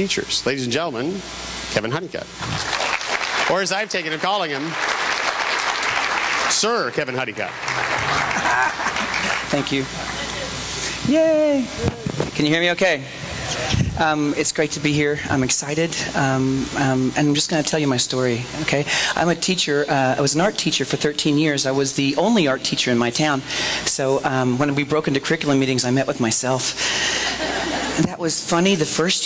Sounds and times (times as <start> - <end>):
Speech: 0.0 - 2.3, 3.5 - 4.8, 6.5 - 7.5, 9.5 - 26.7, 28.0 - 29.2.